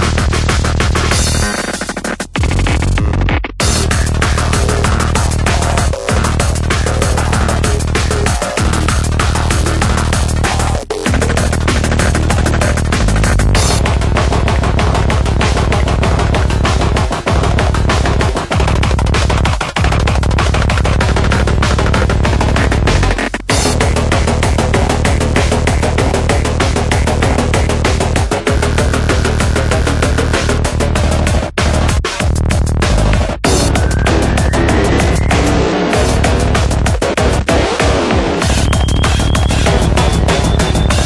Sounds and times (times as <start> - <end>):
Music: 0.0 - 41.0.